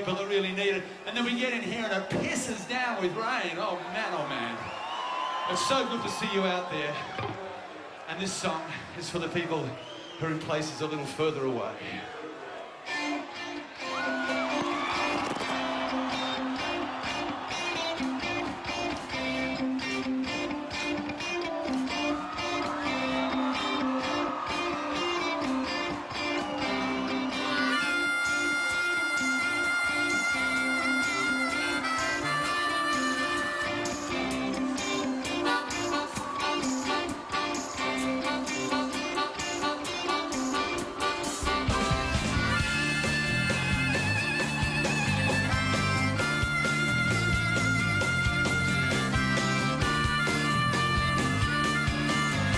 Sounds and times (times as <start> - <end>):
Speech: 0.0 - 4.6, 5.5 - 7.2, 8.1 - 12.1
Music: 12.8 - 52.5.